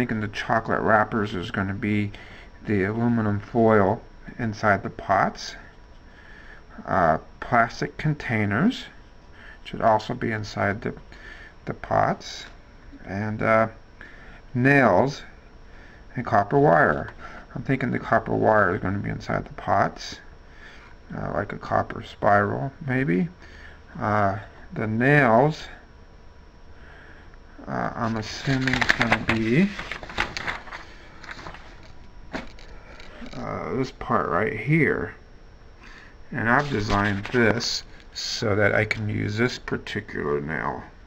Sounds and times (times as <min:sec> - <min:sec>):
Speech: 0:00.0 - 0:05.7, 0:06.8 - 0:09.0, 0:09.7 - 0:11.0, 0:11.6 - 0:13.8, 0:14.5 - 0:15.4, 0:16.1 - 0:20.3, 0:21.1 - 0:25.9, 0:27.6 - 0:29.9, 0:33.2 - 0:35.2, 0:36.3 - 0:41.0
Inside, small room: 0:00.0 - 0:41.0.